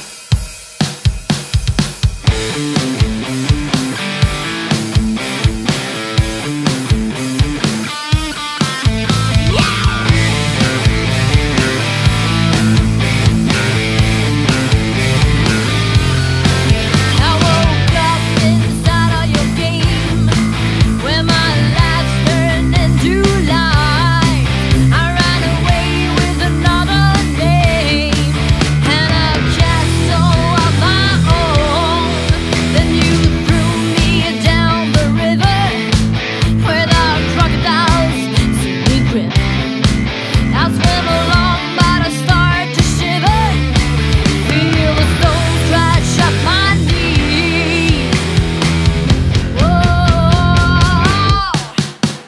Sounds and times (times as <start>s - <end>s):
Blues: 0.0s - 52.2s.